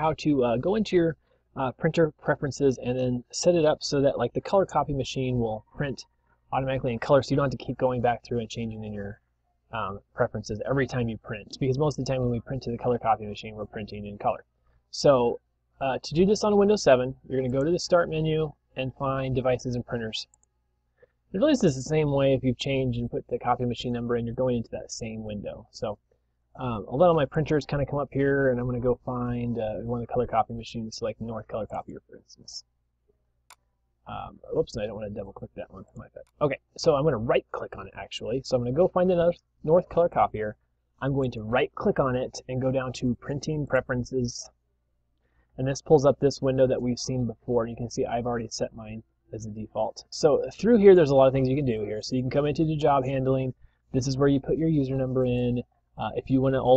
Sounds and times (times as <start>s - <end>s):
Speech: 0.0s - 20.4s, 21.3s - 26.0s, 26.6s - 32.7s, 34.1s - 44.6s, 45.6s - 56.7s.